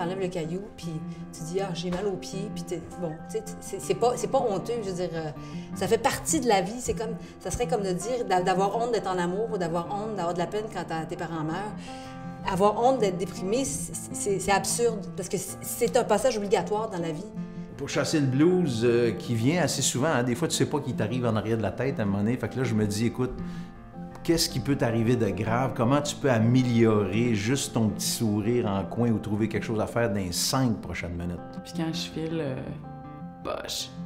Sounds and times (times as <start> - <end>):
Music: 0.0 - 34.0.